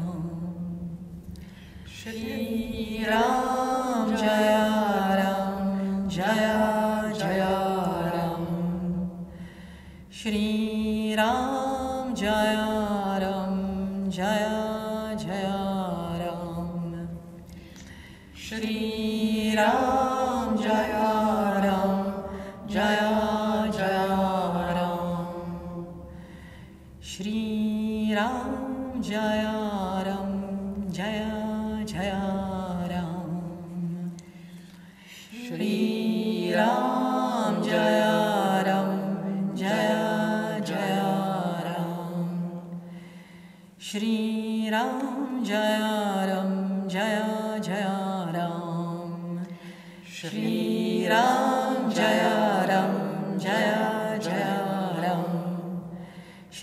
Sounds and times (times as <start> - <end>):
Mantra: 0.0 - 1.2, 1.8 - 56.6.